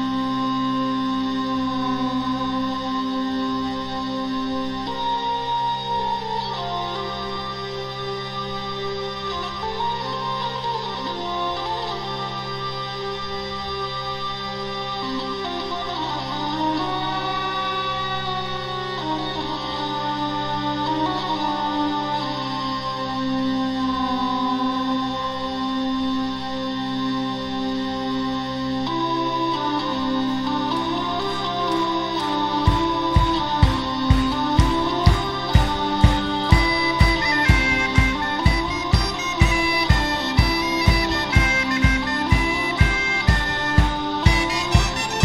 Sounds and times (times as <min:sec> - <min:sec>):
Music: 0:00.0 - 0:45.2.